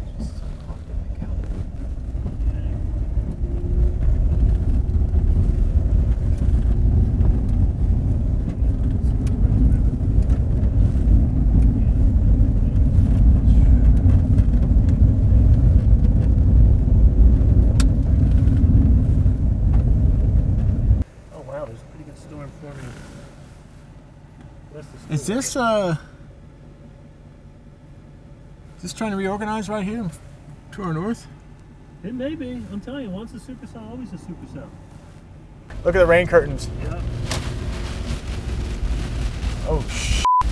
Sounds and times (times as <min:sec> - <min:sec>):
Field recording: 0:00.0 - 0:40.5.